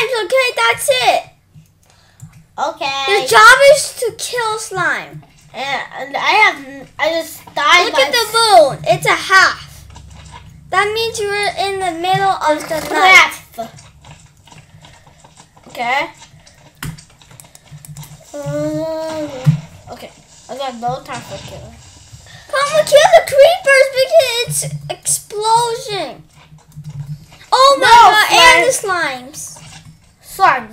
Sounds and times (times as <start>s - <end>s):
Speech: 0.0s - 1.3s, 2.6s - 9.7s, 10.8s - 13.7s, 15.7s - 16.2s, 18.4s - 21.8s, 22.5s - 26.2s, 27.5s - 29.6s, 30.3s - 30.7s
Computer keyboard: 16.4s - 18.2s.